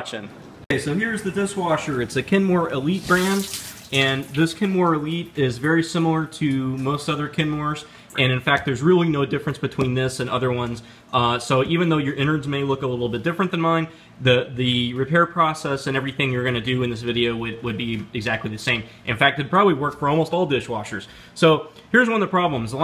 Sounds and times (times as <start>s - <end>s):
Speech: 0.0s - 22.8s
Liquid: 2.8s - 5.0s.